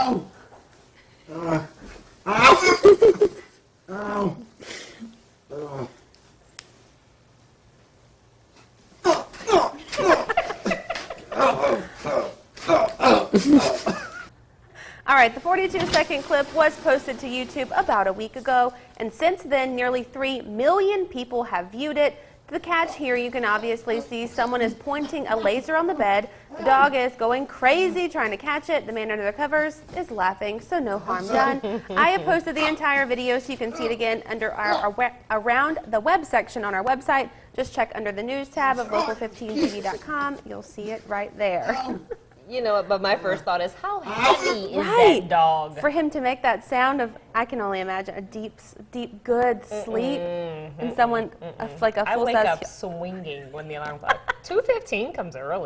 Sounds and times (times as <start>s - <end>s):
Inside, small room: 0.0s - 55.6s.